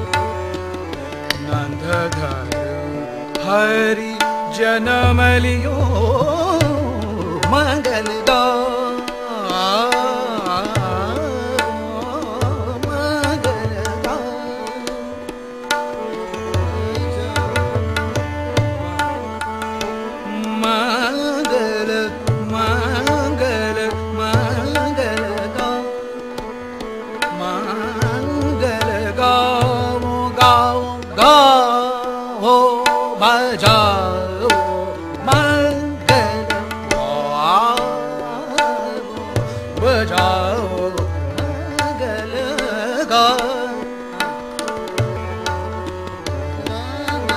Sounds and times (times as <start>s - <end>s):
Tabla: 0.0s - 47.3s.